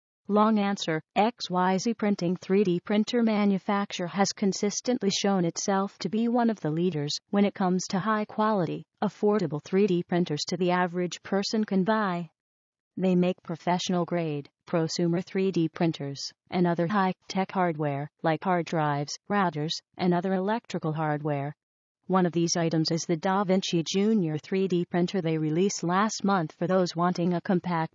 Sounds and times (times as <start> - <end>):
Speech: 0.3 - 12.3, 13.0 - 27.9.